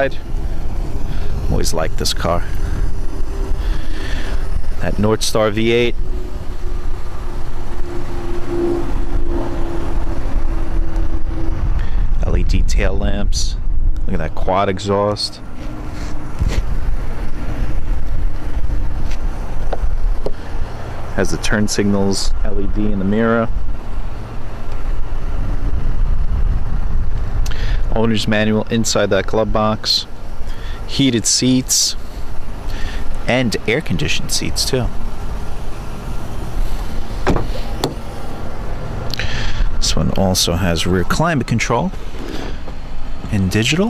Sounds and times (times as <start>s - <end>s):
Car: 0.0s - 43.8s
Door: 37.2s - 38.0s.